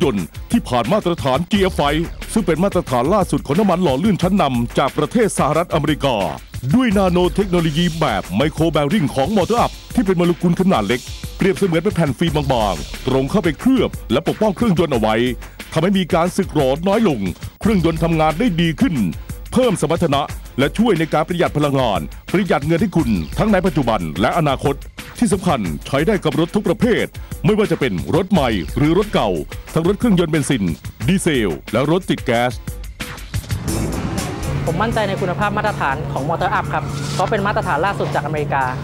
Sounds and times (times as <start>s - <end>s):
Speech: 0.0s - 32.6s, 34.7s - 38.8s
Music: 0.0s - 38.8s.